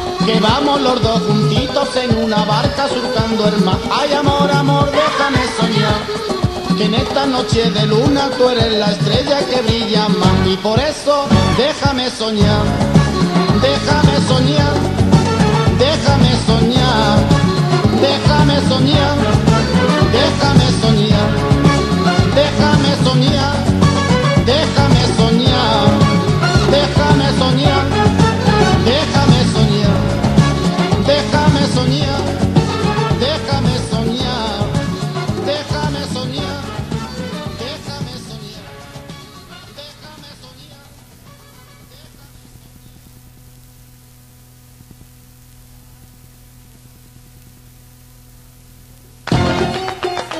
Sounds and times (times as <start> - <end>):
Flamenco: 0.0 - 42.6, 49.3 - 50.3
Ska: 0.0 - 50.3.